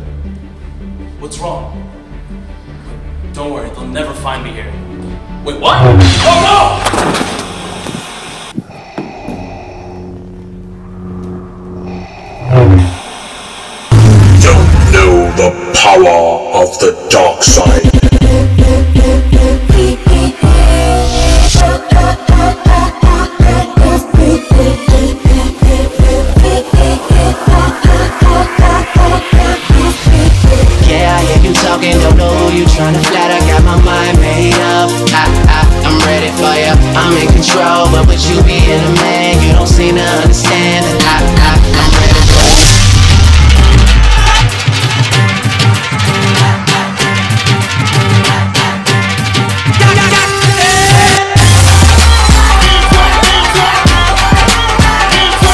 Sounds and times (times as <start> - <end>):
Music: 0.0 - 7.2, 13.9 - 55.5
Speech: 5.4 - 6.8, 14.4 - 17.9.